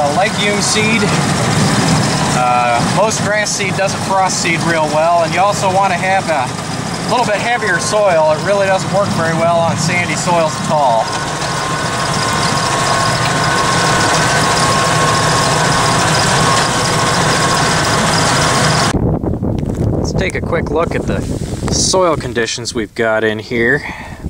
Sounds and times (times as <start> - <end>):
Speech: 0.0 - 1.2, 2.4 - 6.5, 7.1 - 11.1, 20.0 - 24.0
Vibration: 0.0 - 19.0
Vehicle: 0.0 - 24.3.